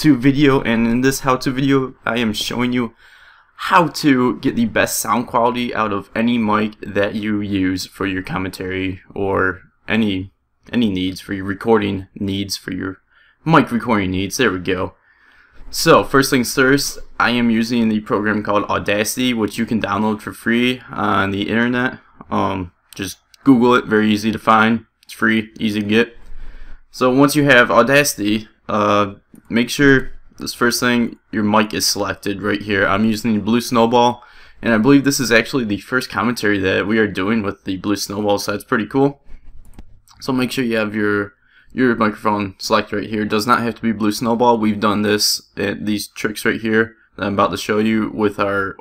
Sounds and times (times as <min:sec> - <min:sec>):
Speech: 0:00.0 - 0:03.0, 0:03.6 - 0:15.0, 0:15.6 - 0:26.2, 0:26.9 - 0:39.2, 0:40.1 - 0:48.8.